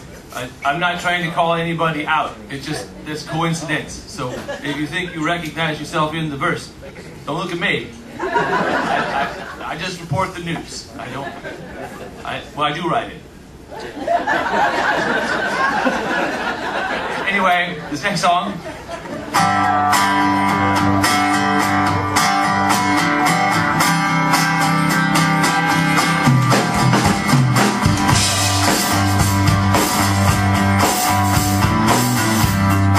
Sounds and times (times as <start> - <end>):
Music: 19.3 - 32.9.